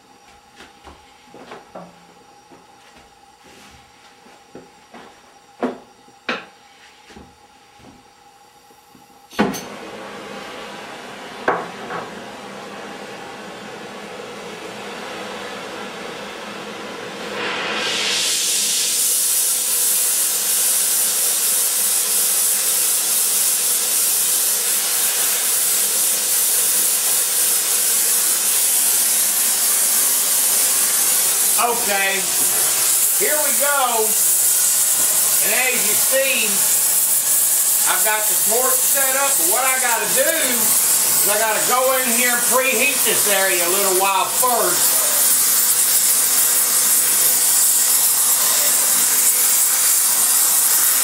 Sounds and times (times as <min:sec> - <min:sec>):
Spray: 0:17.2 - 0:51.0.